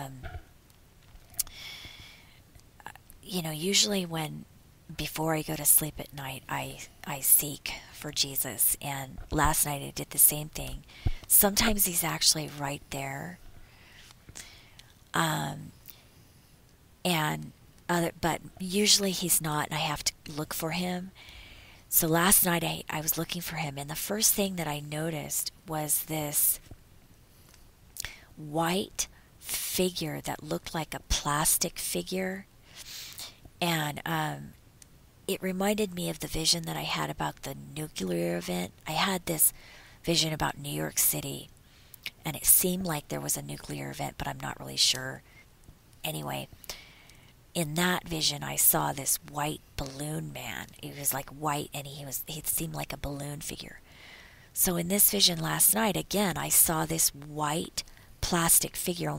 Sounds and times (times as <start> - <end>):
Speech: 0.0 - 0.4, 2.8 - 13.4, 15.2 - 15.8, 17.1 - 21.2, 21.9 - 26.6, 28.0 - 32.5, 33.2 - 34.6, 35.3 - 41.5, 42.1 - 45.2, 46.0 - 46.5, 47.6 - 53.8, 54.6 - 59.1.